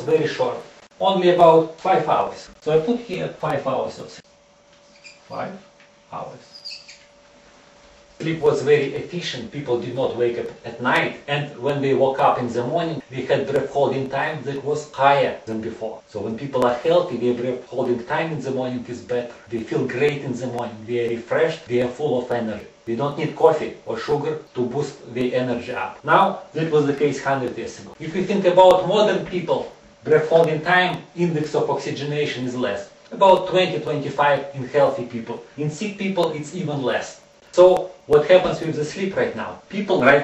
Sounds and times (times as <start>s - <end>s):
Speech: 0.0s - 4.3s, 5.3s - 6.6s, 8.2s - 40.2s.